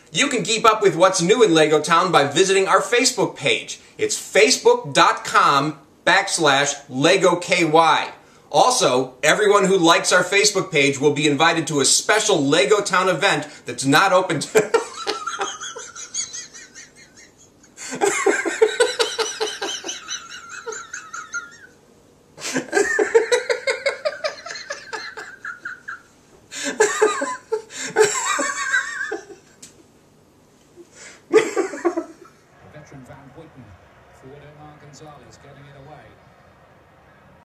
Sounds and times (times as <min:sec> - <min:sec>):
Speech: 0:00.1 - 0:14.7, 0:32.6 - 0:36.2.